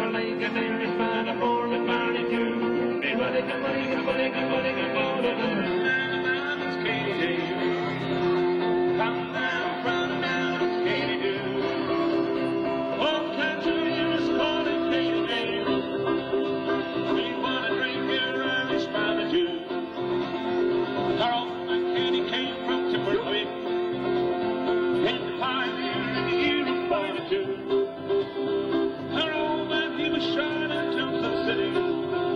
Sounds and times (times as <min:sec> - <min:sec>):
Banjo: 0:00.0 - 0:32.3.